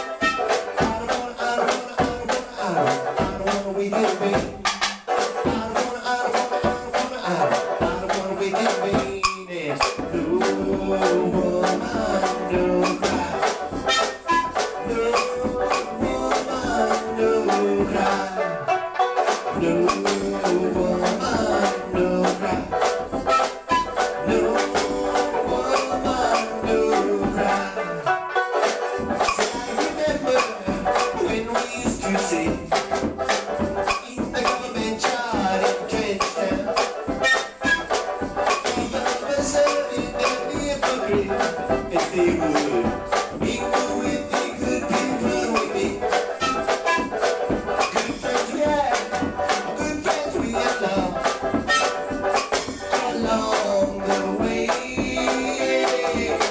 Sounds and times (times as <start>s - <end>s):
Singing: 0.0s - 4.7s, 5.4s - 18.8s, 19.5s - 28.1s, 29.3s - 32.8s, 33.9s - 47.2s, 47.8s - 52.0s, 52.7s - 56.5s
Musical instrument: 0.0s - 56.5s.